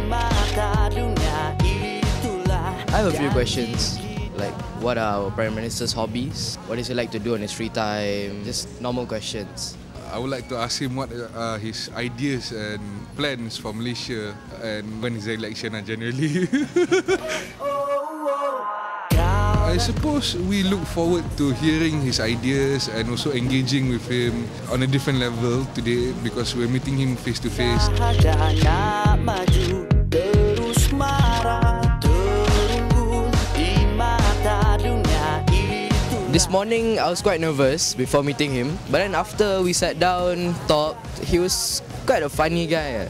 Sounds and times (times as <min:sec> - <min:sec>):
Music: 0:00.0 - 0:10.8, 0:17.2 - 0:43.1
Speech: 0:02.9 - 0:16.2, 0:19.6 - 0:28.0, 0:36.3 - 0:43.1.